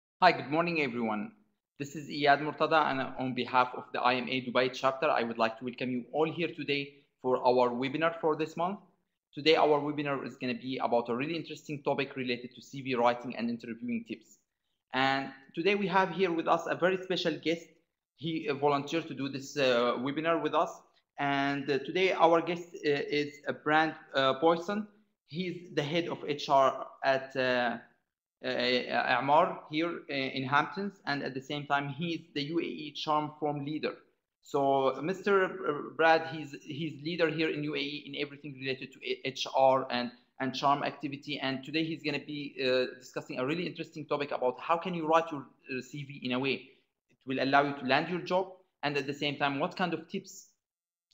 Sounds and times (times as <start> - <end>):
Speech: 0.2 - 17.6, 18.2 - 27.8, 28.4 - 46.6, 47.3 - 50.6.